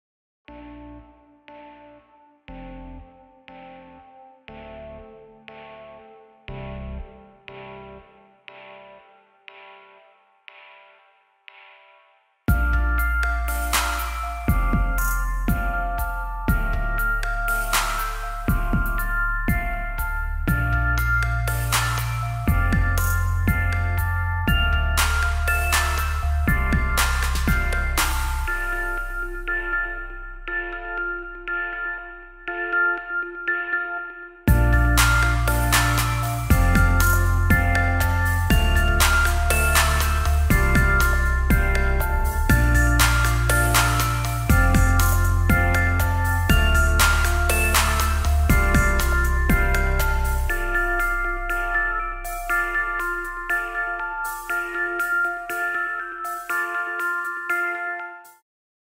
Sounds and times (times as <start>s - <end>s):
Music: 0.4s - 58.4s.